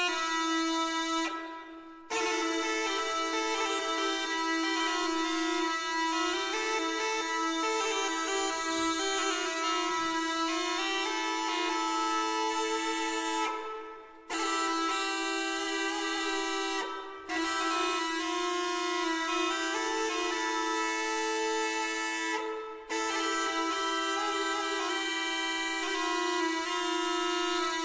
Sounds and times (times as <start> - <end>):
Music: 0.0 - 27.8.